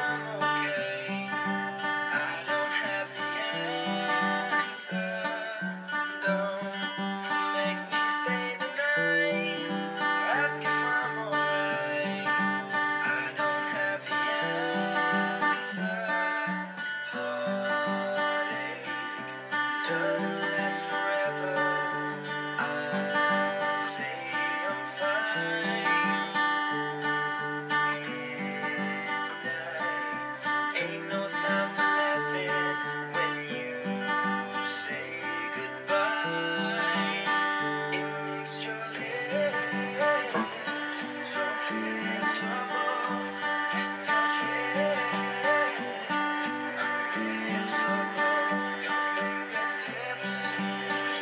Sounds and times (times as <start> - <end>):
Acoustic guitar: 0.0 - 51.2.